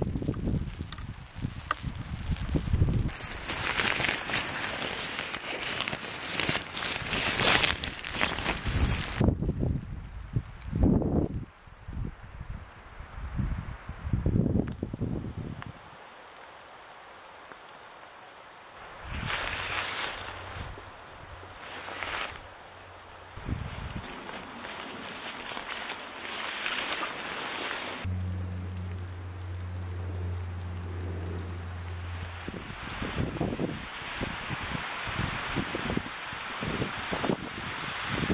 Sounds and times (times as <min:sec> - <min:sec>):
Rain on surface: 0:00.0 - 0:38.3.